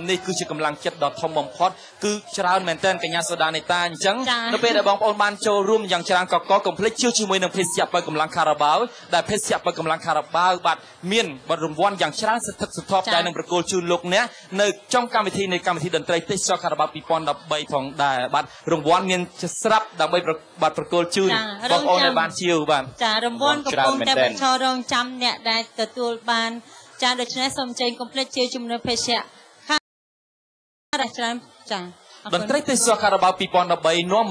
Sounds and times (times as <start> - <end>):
Speech: 0.0 - 26.5.